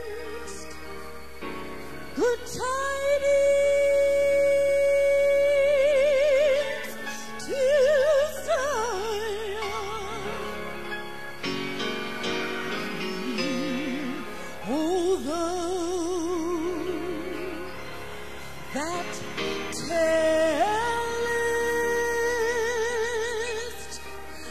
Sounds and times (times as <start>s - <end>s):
Gospel music: 0.0s - 24.5s.